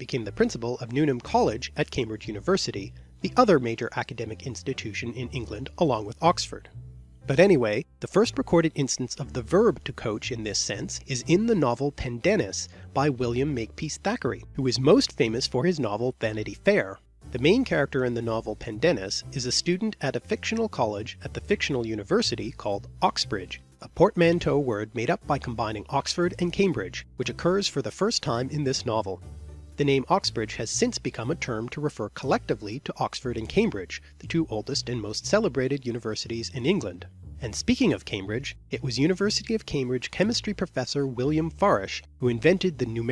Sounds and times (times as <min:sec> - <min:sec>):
Music: 0:00.0 - 0:43.1
Narration, monologue: 0:00.0 - 0:43.1.